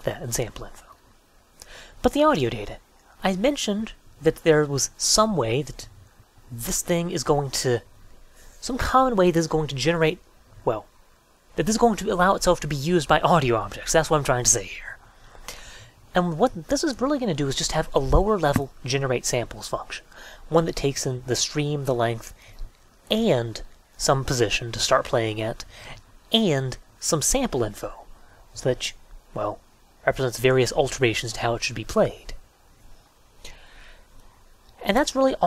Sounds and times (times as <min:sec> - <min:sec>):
Narration, monologue: 0:00.0 - 0:35.4.